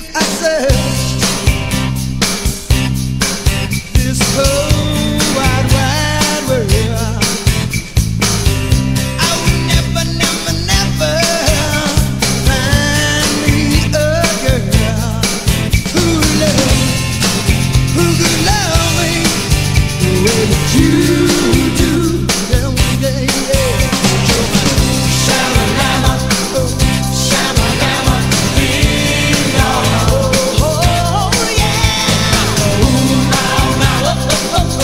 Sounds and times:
Music: 0:00.0 - 0:34.8.

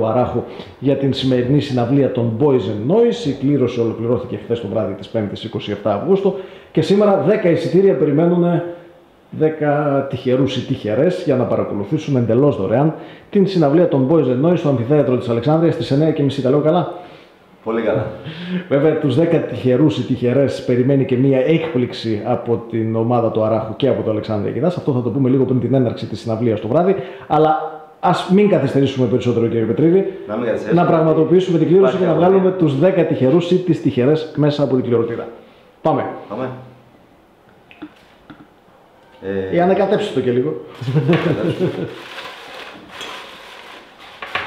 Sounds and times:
Speech: 0:00.0 - 0:08.7, 0:09.3 - 0:17.0, 0:17.6 - 0:36.8, 0:39.2 - 0:41.8.

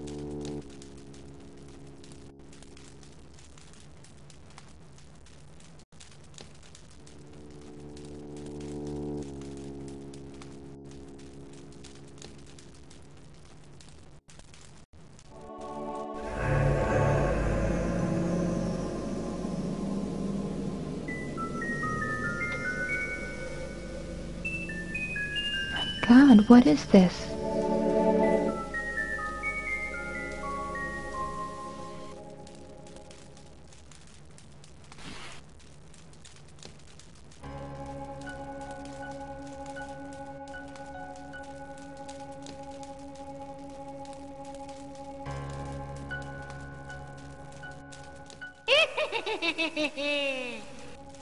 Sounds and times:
Glockenspiel: 0:21.1 - 0:26.7, 0:27.9 - 0:32.1.

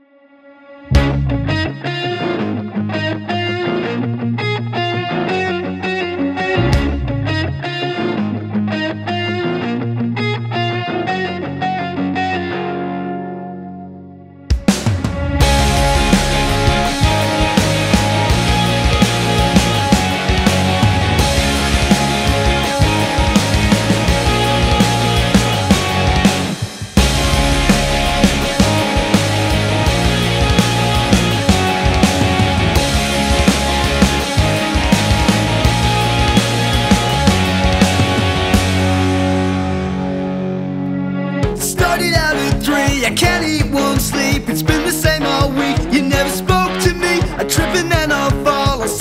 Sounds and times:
Jazz: 0:14.6 - 0:41.7.

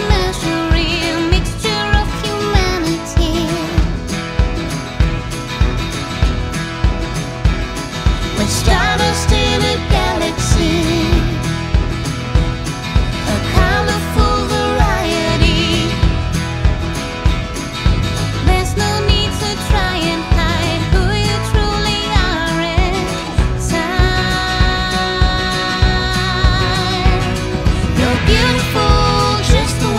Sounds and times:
Music: 0:00.0 - 0:29.9.

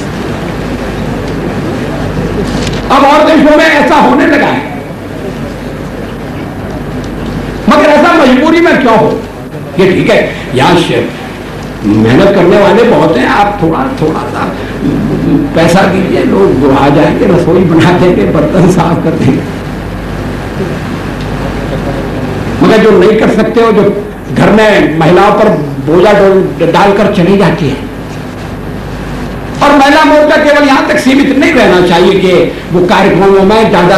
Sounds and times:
Narration, monologue: 0:02.4 - 0:33.9
Male speech, man speaking: 0:02.9 - 0:04.8, 0:07.7 - 0:11.2, 0:11.9 - 0:14.6, 0:15.4 - 0:19.5, 0:22.6 - 0:27.9, 0:29.6 - 0:33.9.

